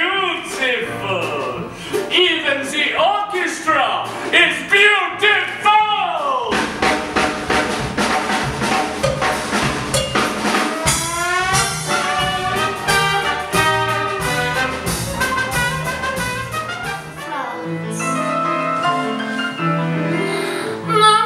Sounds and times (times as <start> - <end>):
Speech: 0.0 - 6.6
Music: 0.0 - 21.2.